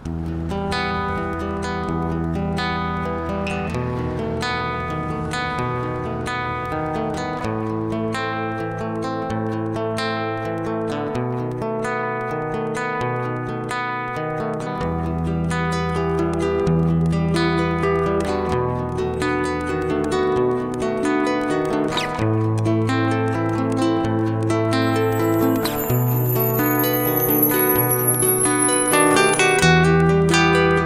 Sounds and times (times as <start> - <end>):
Acoustic guitar: 0.0 - 30.8
Independent music: 0.0 - 30.8.